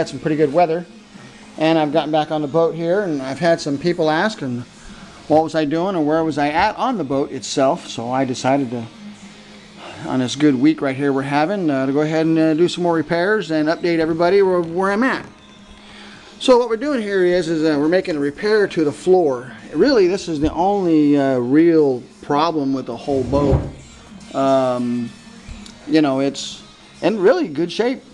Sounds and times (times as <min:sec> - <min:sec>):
Speech: 0:00.0 - 0:00.9, 0:01.6 - 0:04.7, 0:05.3 - 0:08.9, 0:10.0 - 0:15.3, 0:16.4 - 0:23.7, 0:24.3 - 0:25.1, 0:25.9 - 0:28.1.